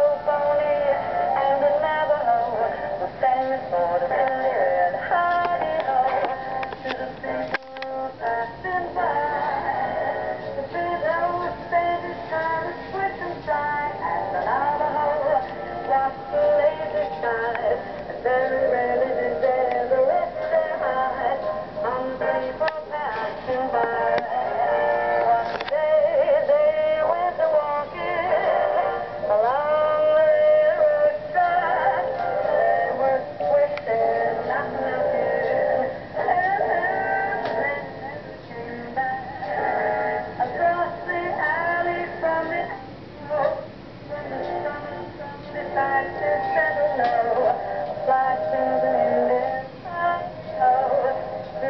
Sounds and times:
Music: 0:00.0 - 0:51.7.

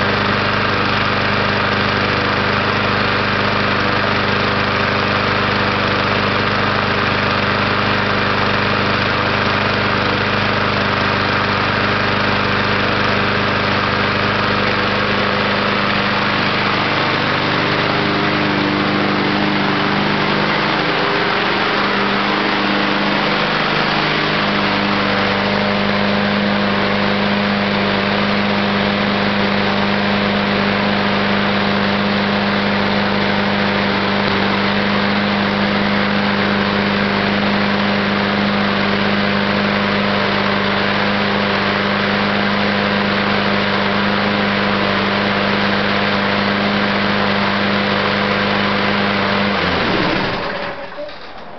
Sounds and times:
Lawn mower: 0:00.0 - 0:51.5.

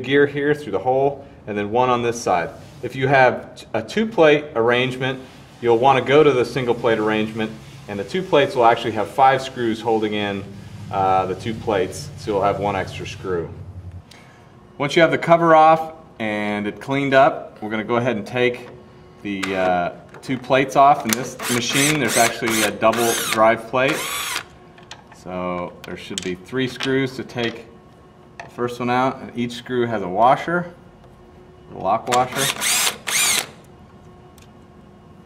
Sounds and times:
Speech: 0:00.0 - 0:13.6, 0:14.8 - 0:24.0, 0:25.2 - 0:27.7, 0:28.5 - 0:30.8, 0:31.7 - 0:32.6.

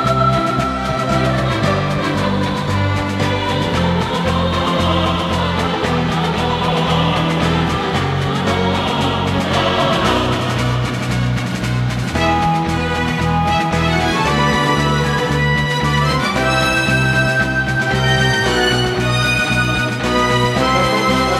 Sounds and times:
Music: 0:00.0 - 0:21.3.

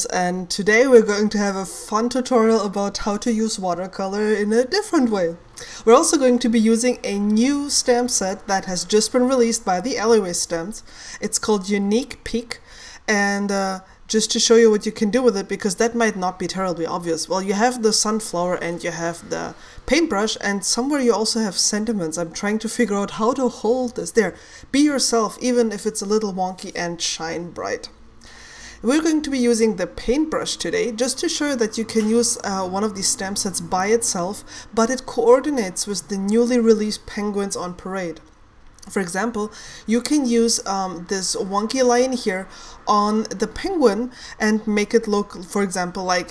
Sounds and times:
Speech: 0:00.0 - 0:28.0, 0:28.8 - 0:46.3.

